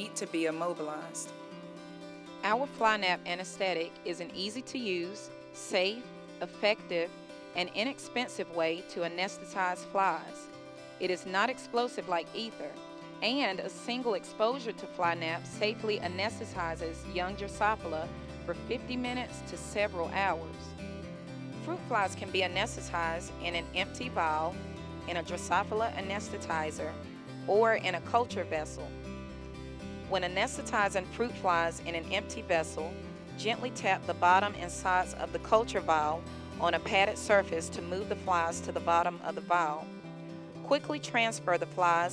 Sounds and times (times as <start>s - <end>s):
Speech: 0.0s - 1.3s, 2.4s - 10.4s, 11.0s - 20.6s, 21.7s - 24.5s, 25.1s - 26.9s, 27.5s - 28.9s, 30.1s - 39.8s, 40.7s - 42.1s
Music: 0.0s - 42.1s.